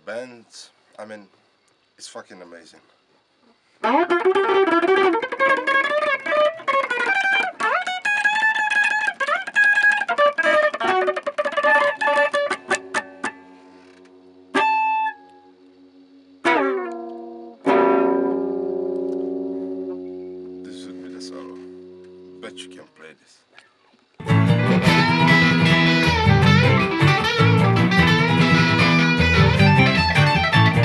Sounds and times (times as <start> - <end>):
Speech: 0.0 - 1.3, 2.0 - 2.9, 20.7 - 21.6, 22.4 - 23.5
Electric guitar: 3.8 - 22.8, 24.1 - 30.8.